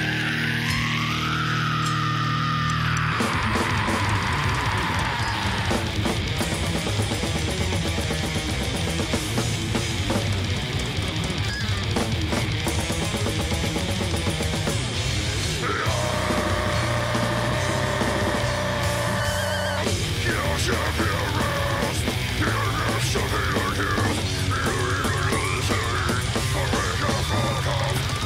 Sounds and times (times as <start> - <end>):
Music: 0.0 - 28.2.